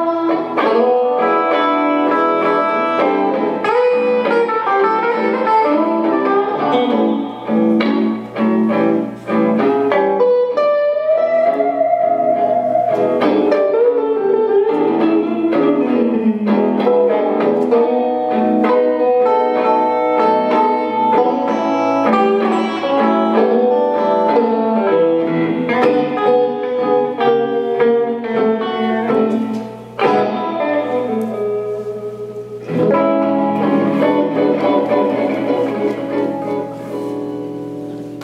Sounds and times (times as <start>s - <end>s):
Blues: 0.0s - 38.2s
Guitar: 0.0s - 38.2s.